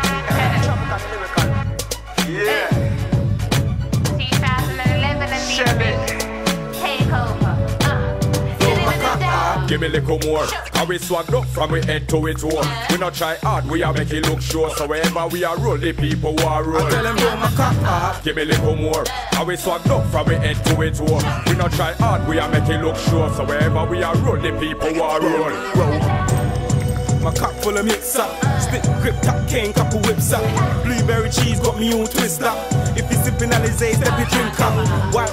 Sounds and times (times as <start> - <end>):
Music: 0.0 - 35.3.